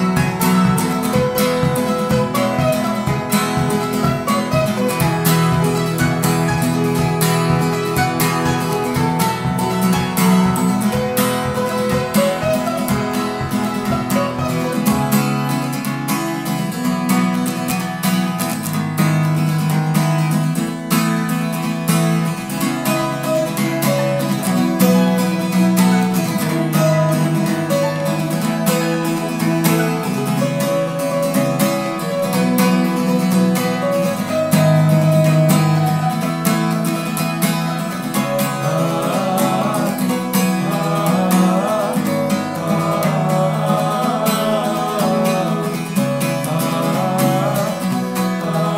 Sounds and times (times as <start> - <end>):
Mandolin: 0.0 - 48.7.